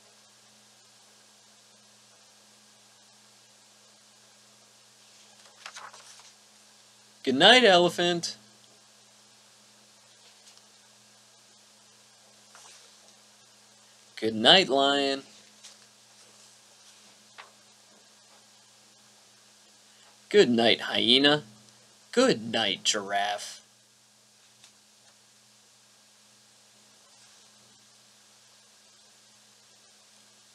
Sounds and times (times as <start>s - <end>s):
Narration, monologue: 7.2s - 8.7s, 12.5s - 16.4s, 19.9s - 23.7s.